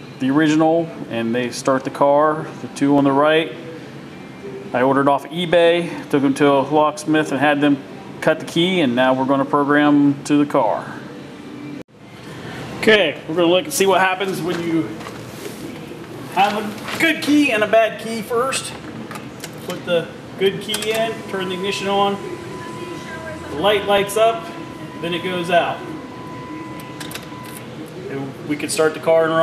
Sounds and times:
Speech: 4.7 - 11.0, 12.8 - 15.0, 16.3 - 18.8, 19.7 - 26.0, 28.1 - 29.4.

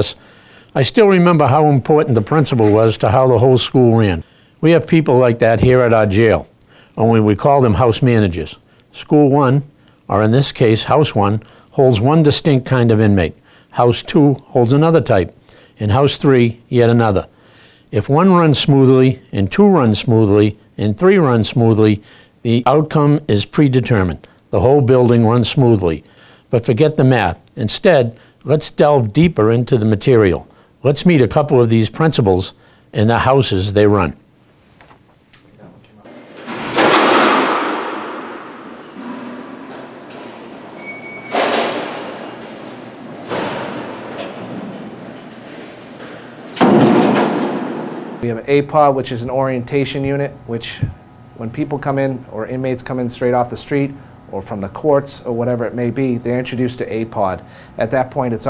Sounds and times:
Speech: 0.0 - 0.2, 0.8 - 17.3, 17.9 - 34.2, 35.5 - 36.1, 48.2 - 58.5.

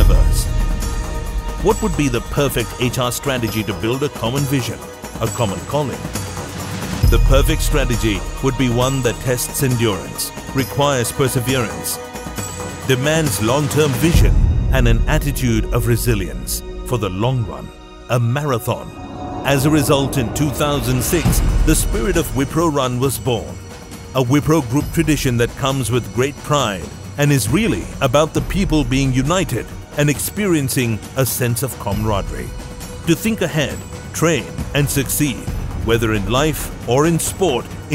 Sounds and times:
Speech: 0.0 - 0.5, 1.6 - 6.0, 7.1 - 12.0, 12.9 - 23.6, 24.2 - 32.5, 33.1 - 37.9
Music: 0.0 - 37.9.

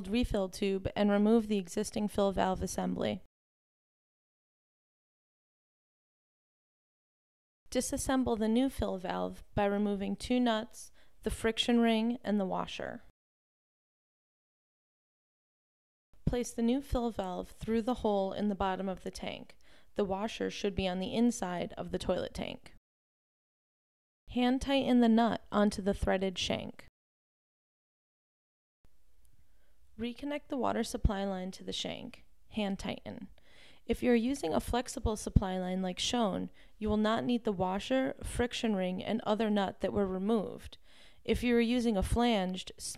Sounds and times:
Speech: 0.0 - 3.3, 7.7 - 13.1, 16.3 - 22.8, 24.3 - 26.9, 30.0 - 33.3, 33.9 - 42.9.

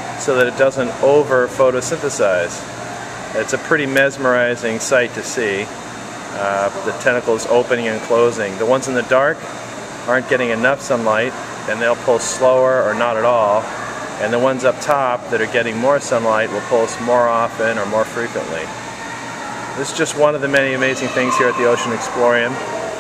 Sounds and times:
Speech: 0.2 - 2.6, 3.4 - 5.7, 6.4 - 9.4, 10.1 - 18.7, 19.8 - 22.7.

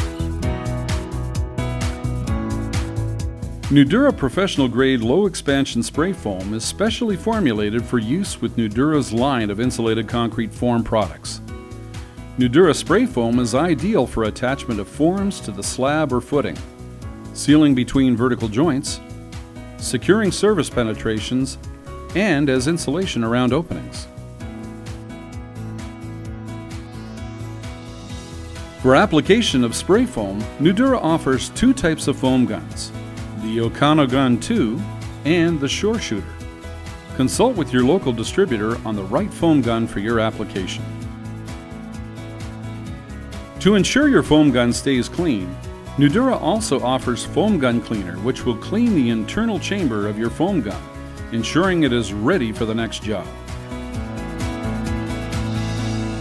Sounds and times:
Music: 0.0 - 56.2
Speech: 3.7 - 11.4, 12.4 - 16.7, 17.4 - 19.0, 19.8 - 24.1, 28.8 - 36.3, 37.2 - 40.8, 43.6 - 53.4.

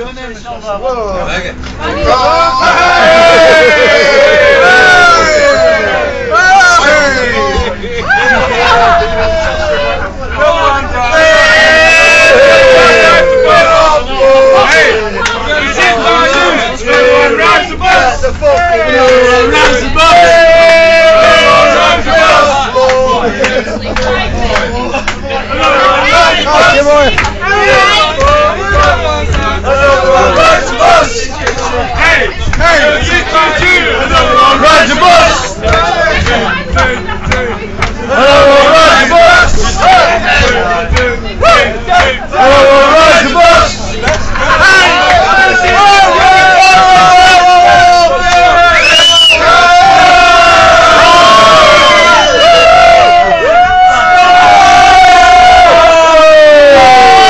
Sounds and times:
Vehicle: 0.0 - 55.8.

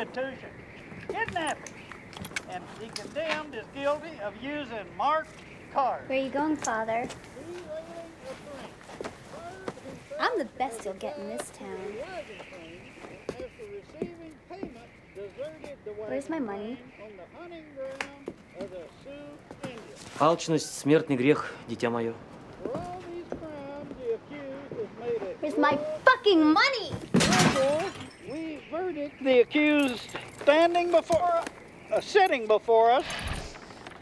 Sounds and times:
Breaking: 27.1 - 28.2.

